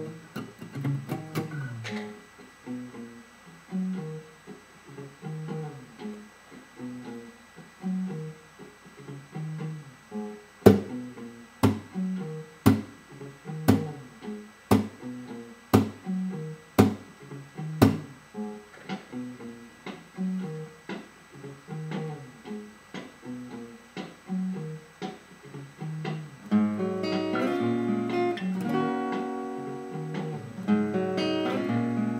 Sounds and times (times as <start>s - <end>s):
Guitar: 0.0s - 32.1s.